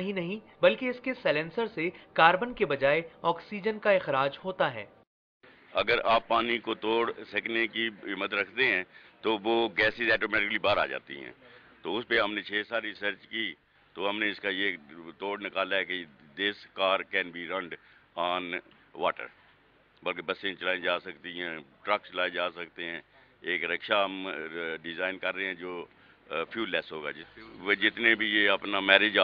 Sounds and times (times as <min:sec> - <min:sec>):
Speech: 0:00.0 - 0:04.9, 0:05.7 - 0:19.4, 0:20.0 - 0:29.2.